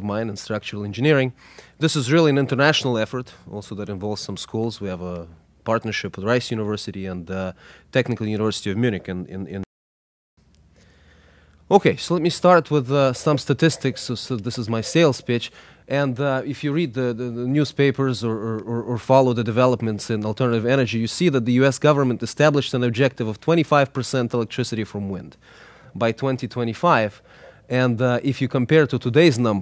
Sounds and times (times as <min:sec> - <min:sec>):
Speech: 0:00.0 - 0:09.7, 0:11.7 - 0:25.4, 0:26.0 - 0:29.6.